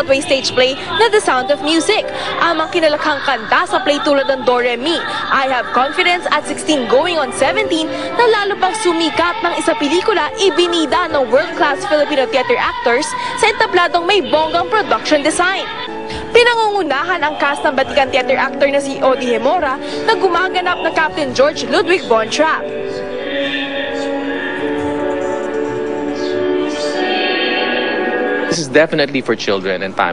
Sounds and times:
Music: 0.0 - 30.1.

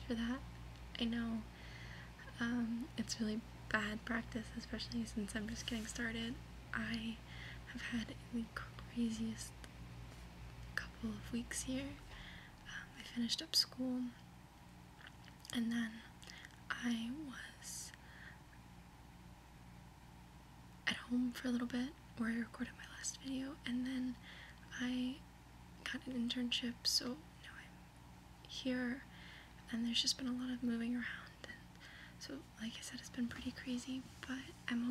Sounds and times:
Speech: 1.0 - 1.5, 2.2 - 9.6, 10.8 - 12.1, 13.0 - 14.2, 20.9 - 25.2, 25.8 - 27.2.

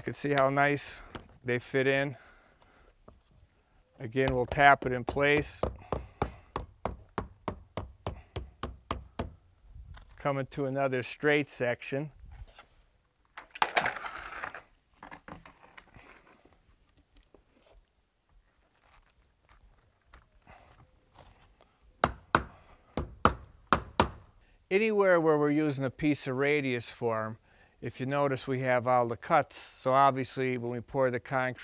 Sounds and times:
Speech: 0.0 - 2.2, 4.0 - 5.6, 10.2 - 12.1, 24.7 - 31.6
Outside, rural or natural: 0.0 - 31.6.

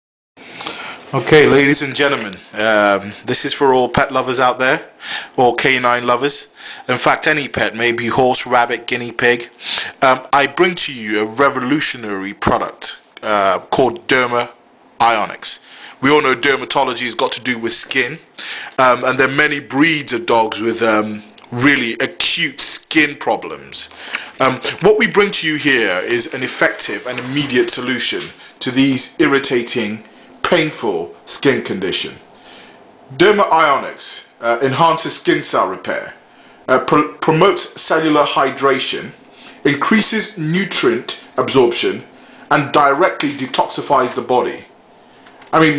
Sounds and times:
Speech: 1.1 - 32.3, 33.1 - 44.7, 45.5 - 45.7.

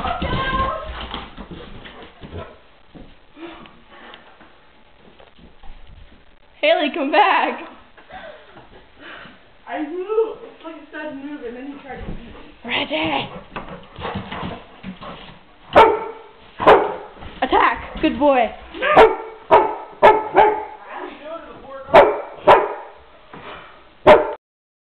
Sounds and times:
Canidae, dogs, wolves: 15.7 - 17.2, 18.8 - 21.0, 21.9 - 23.0
Bark: 15.8 - 17.1, 18.8 - 20.8, 21.9 - 23.0, 24.0 - 24.4.

